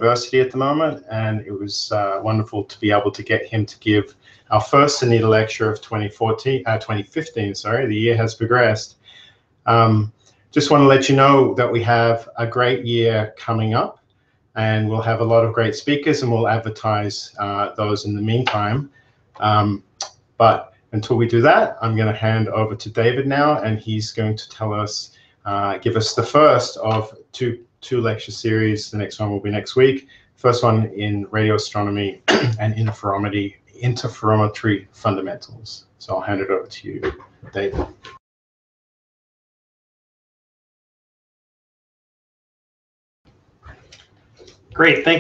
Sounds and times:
Speech: 0:00.0 - 0:09.0, 0:09.7 - 0:14.0, 0:14.6 - 0:38.2, 0:44.8 - 0:45.2.

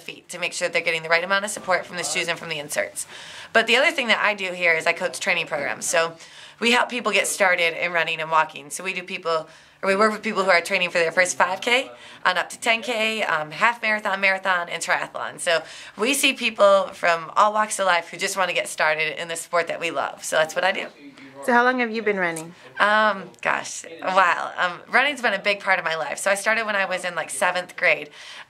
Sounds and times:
Speech: 0:00.0 - 0:28.1.

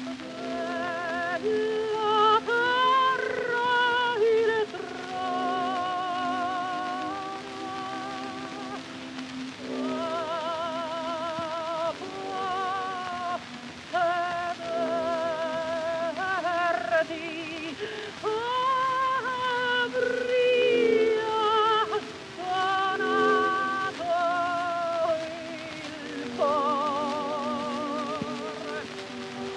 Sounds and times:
Violin, fiddle: 0:00.0 - 0:29.5.

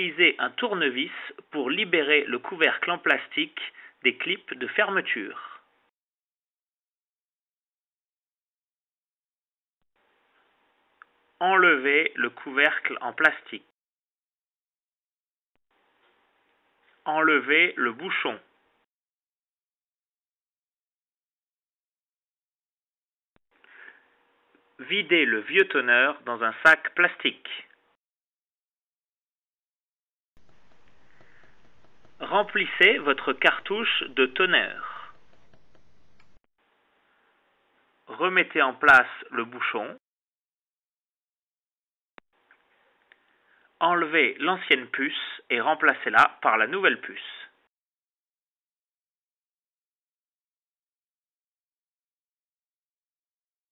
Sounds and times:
Speech: 0:00.0 - 0:05.7, 0:11.4 - 0:13.7, 0:17.0 - 0:18.5, 0:24.8 - 0:27.8, 0:32.2 - 0:35.1, 0:38.1 - 0:40.0, 0:43.8 - 0:47.6.

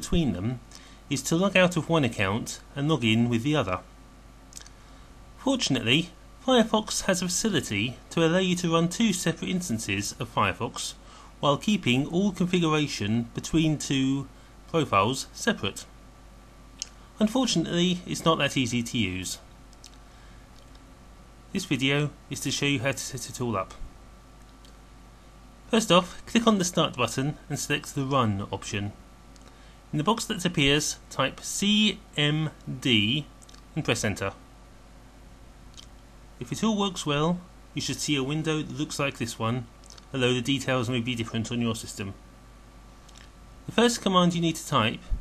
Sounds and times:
Speech: 0:00.0 - 0:03.9, 0:05.4 - 0:16.0, 0:16.8 - 0:19.5, 0:21.5 - 0:23.9, 0:25.7 - 0:29.0, 0:29.9 - 0:34.4, 0:36.4 - 0:42.2, 0:43.7 - 0:45.2.

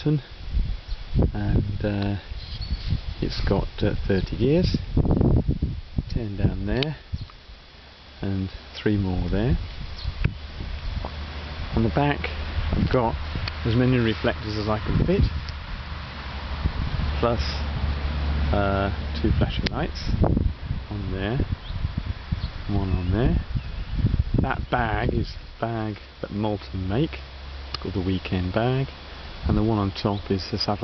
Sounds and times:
Speech: 0:00.0 - 0:00.3, 0:01.3 - 0:02.3, 0:03.2 - 0:04.8, 0:06.1 - 0:07.0, 0:08.2 - 0:09.6, 0:11.7 - 0:15.3, 0:17.2 - 0:17.7, 0:18.5 - 0:20.2, 0:20.9 - 0:21.5, 0:22.7 - 0:23.5, 0:24.4 - 0:27.2, 0:27.8 - 0:30.8.

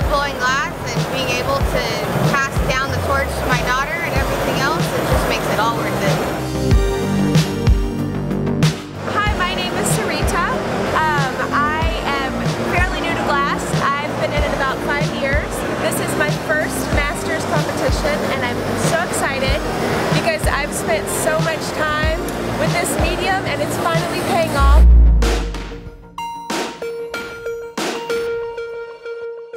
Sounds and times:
Speech: 0:00.0 - 0:06.2, 0:09.1 - 0:19.6, 0:20.2 - 0:24.8
Music: 0:00.0 - 0:29.5.

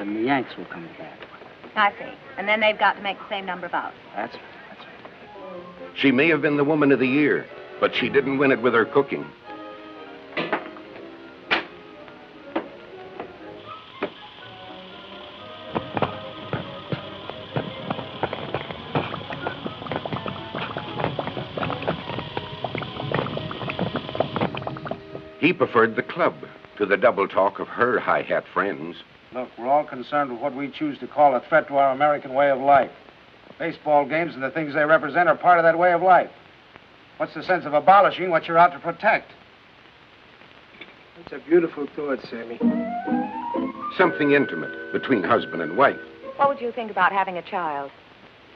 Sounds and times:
Music: 0:02.2 - 0:29.0, 0:41.6 - 0:47.7.

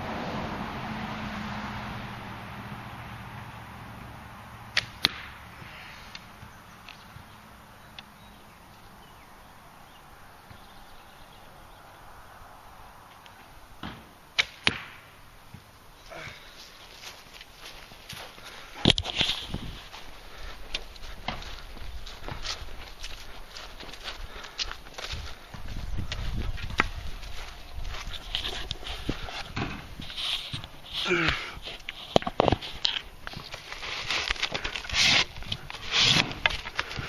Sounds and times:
Arrow: 0:04.8 - 0:05.4, 0:13.8 - 0:15.1.

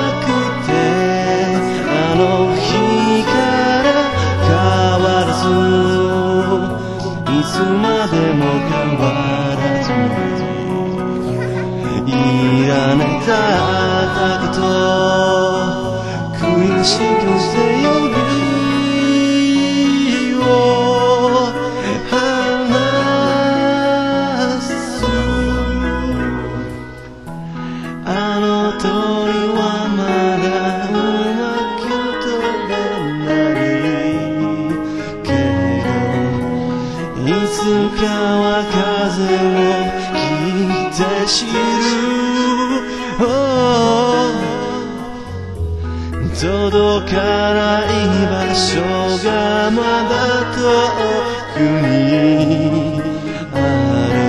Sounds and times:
Acoustic guitar: 0:00.0 - 0:54.2.

